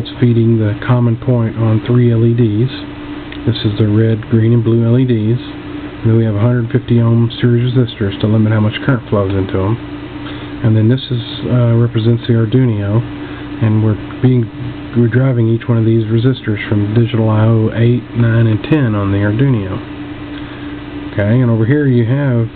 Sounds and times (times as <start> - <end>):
Speech: 0.0 - 9.8, 10.6 - 19.9, 21.1 - 22.5.